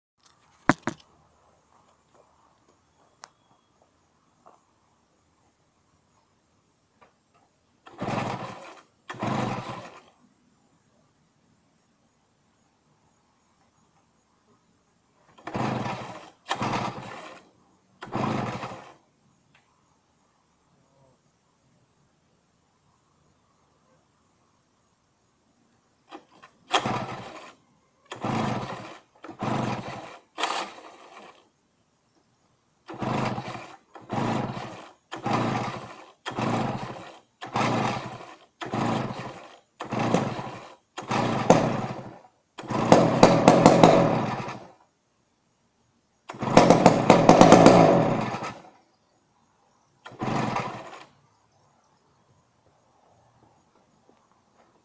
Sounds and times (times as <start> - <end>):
Engine starting: 7.8 - 10.3, 15.2 - 19.1, 26.0 - 31.6, 32.8 - 44.8, 46.2 - 48.8, 49.9 - 51.3.